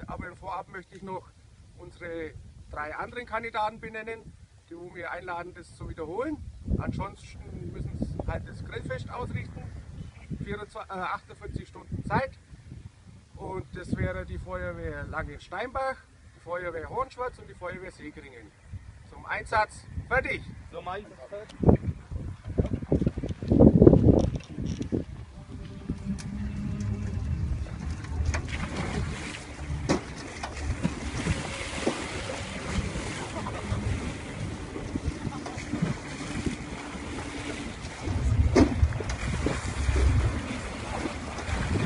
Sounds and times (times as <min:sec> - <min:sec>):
Speech: 0:00.0 - 0:09.7, 0:10.4 - 0:12.4, 0:13.4 - 0:18.5, 0:19.1 - 0:21.6.